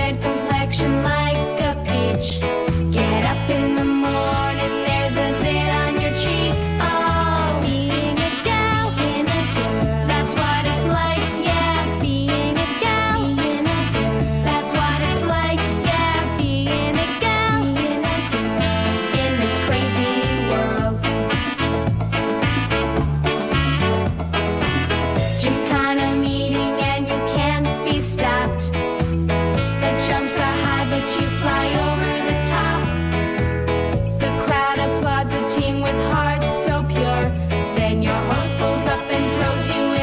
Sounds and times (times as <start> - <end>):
Singing: 0.0 - 21.6, 29.7 - 33.2, 34.2 - 40.0
Music: 0.0 - 40.0.